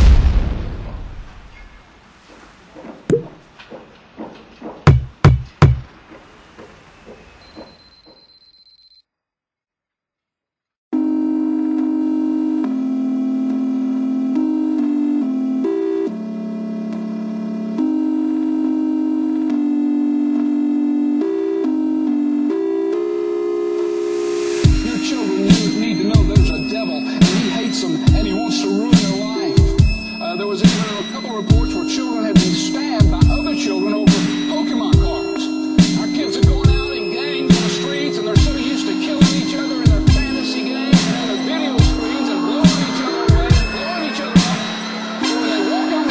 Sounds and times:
Music: 11.0 - 46.1.

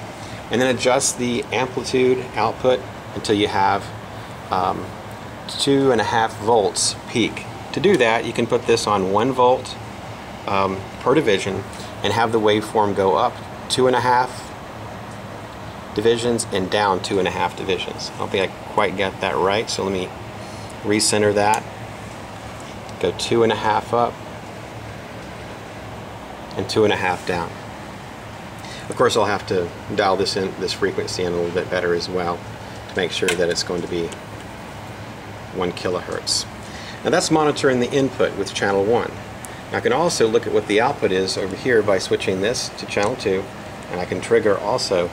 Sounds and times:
Speech: 0.5 - 9.8, 10.5 - 14.5, 16.0 - 20.2, 20.8 - 21.6, 23.0 - 24.2, 26.5 - 27.6, 28.8 - 34.2, 35.5 - 45.1.

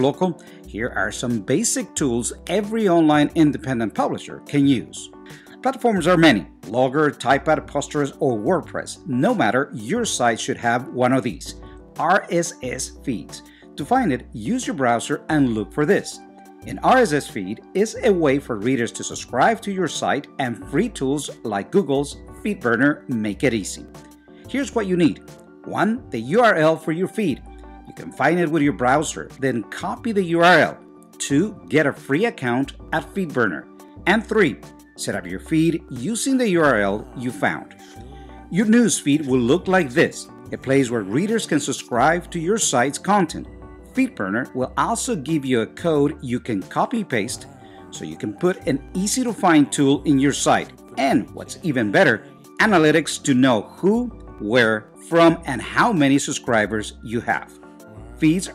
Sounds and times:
Speech: 0.0 - 23.9, 24.5 - 58.5
Music: 0.0 - 58.5.

